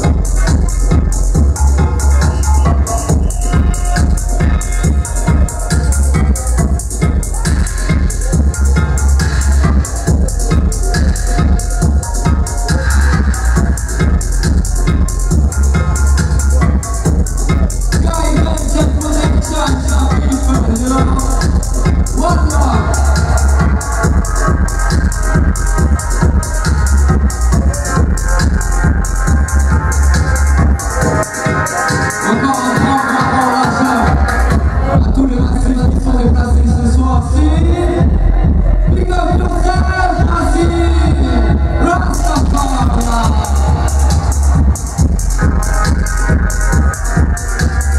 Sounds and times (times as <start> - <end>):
Music: 0.0 - 47.9.